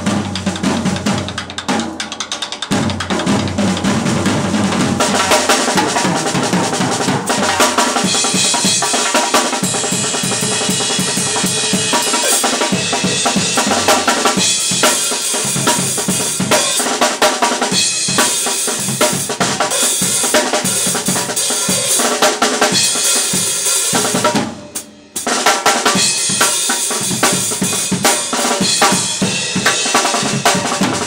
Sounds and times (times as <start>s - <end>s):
Drum: 0.0s - 31.0s
Drum kit: 0.0s - 31.0s.